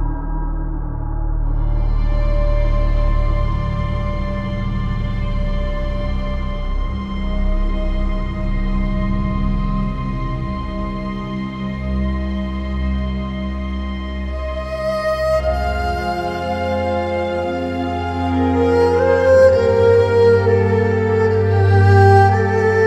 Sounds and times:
Music: 0.0s - 22.8s.

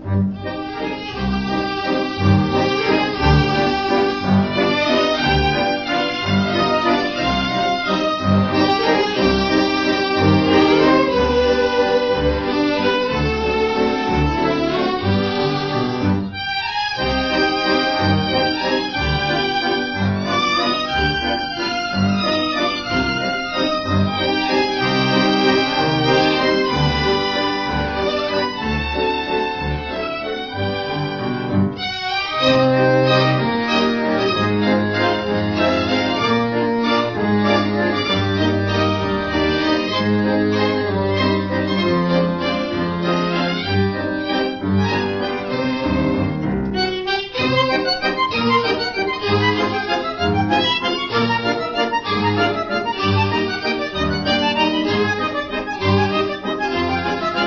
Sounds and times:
Bowed string instrument: 0.0s - 57.4s.

